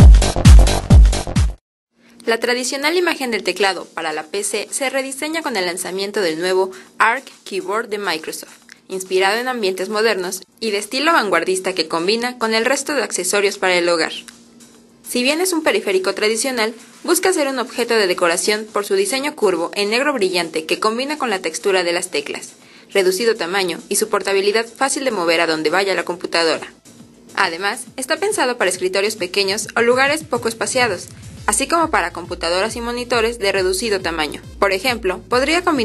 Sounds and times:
Music: 0.0 - 35.8
Speech: 2.2 - 14.3, 15.1 - 26.8, 27.4 - 35.8.

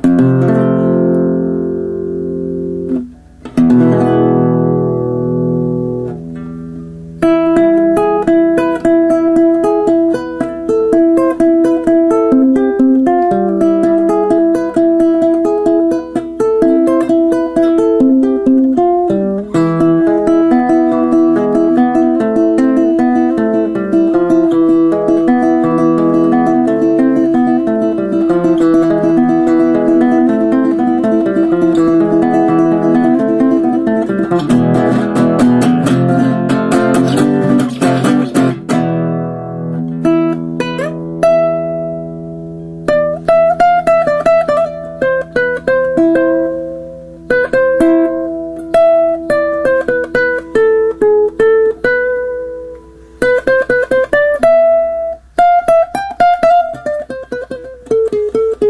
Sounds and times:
Acoustic guitar: 0.0 - 58.6.

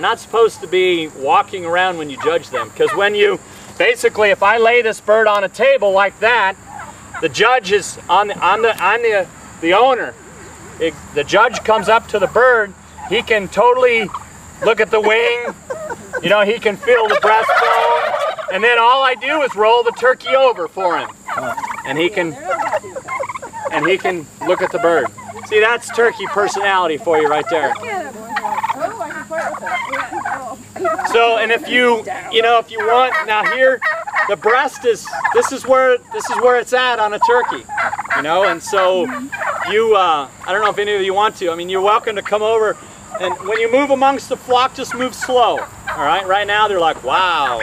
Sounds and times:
Gobble: 2.0 - 3.4, 6.5 - 7.4, 10.1 - 47.6.

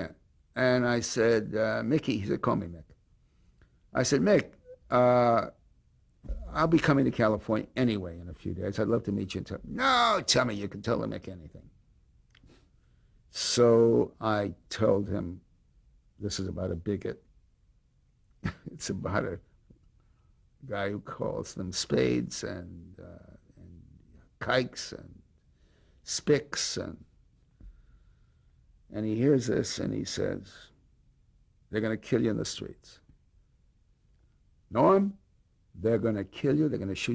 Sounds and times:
Speech: 0.0 - 3.0, 3.9 - 5.6, 6.3 - 11.7, 13.3 - 15.5, 16.2 - 17.3, 18.5 - 19.5, 20.6 - 25.2, 26.1 - 27.1, 28.9 - 30.8, 31.7 - 33.1, 34.7 - 35.2, 35.8 - 37.1.

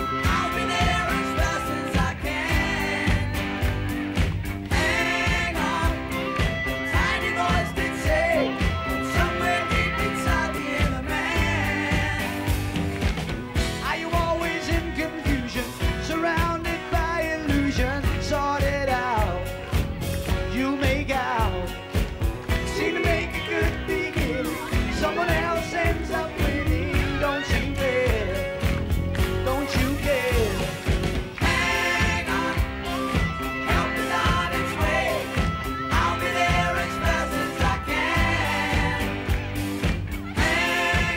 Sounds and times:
Singing: 0.0 - 3.9, 4.7 - 13.0, 13.6 - 19.6, 20.2 - 41.1.

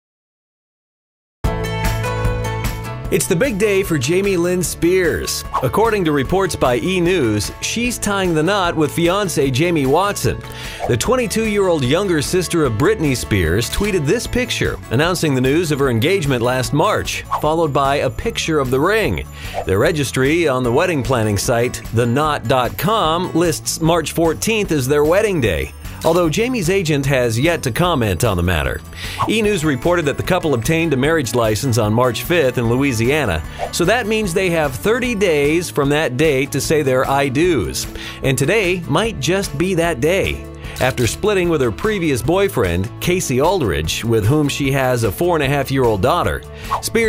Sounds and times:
Music: 1.4 - 47.0
Speech: 3.1 - 47.0.

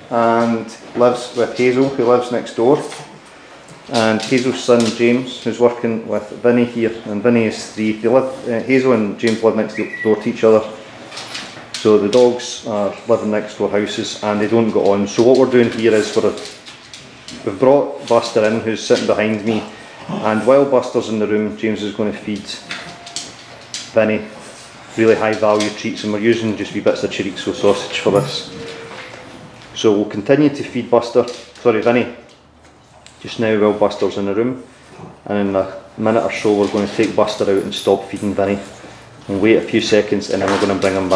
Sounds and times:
Speech: 0.1 - 3.1, 3.9 - 10.8, 11.8 - 16.6, 17.3 - 22.8, 23.9 - 29.1, 29.8 - 32.3, 33.2 - 41.1.

